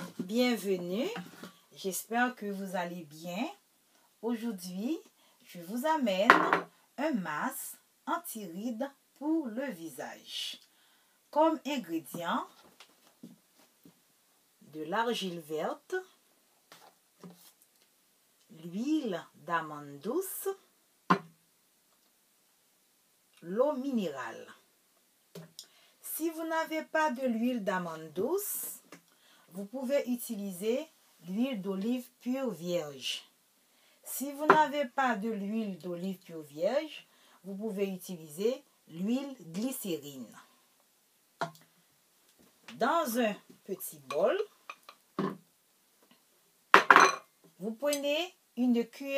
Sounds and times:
Speech: 0.0 - 3.6, 4.2 - 10.7, 11.3 - 12.6, 14.6 - 16.2, 18.5 - 20.7, 23.4 - 24.6, 26.0 - 33.3, 34.1 - 40.5, 42.7 - 44.6, 47.6 - 49.1.

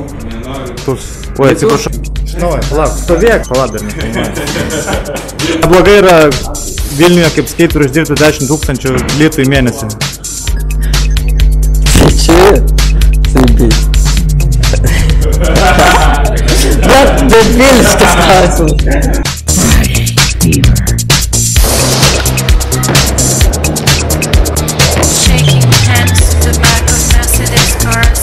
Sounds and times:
Music: 0.0 - 28.2.

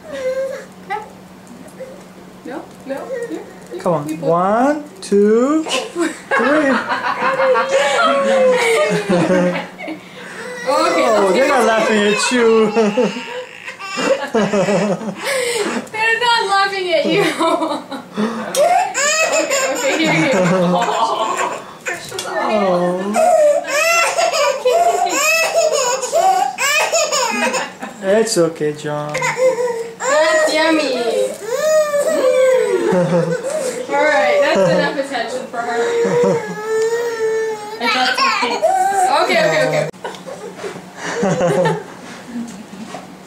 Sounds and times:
Inside, small room: 0.0 - 43.2.

